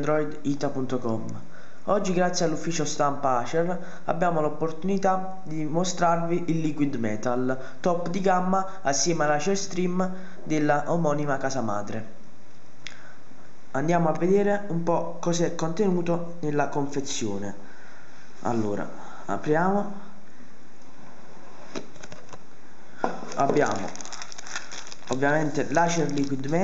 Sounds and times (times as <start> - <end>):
Speech: 0.0 - 12.2, 13.8 - 17.6, 18.4 - 20.1, 23.3 - 24.0, 25.1 - 26.6.